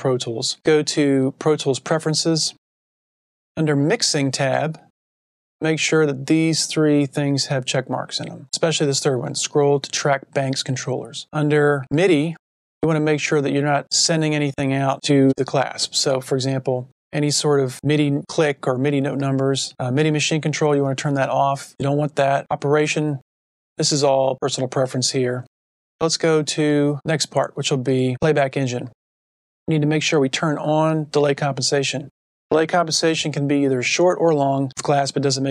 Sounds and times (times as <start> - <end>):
Speech: 0.0 - 2.6, 3.6 - 4.9, 5.6 - 29.0, 29.7 - 35.5.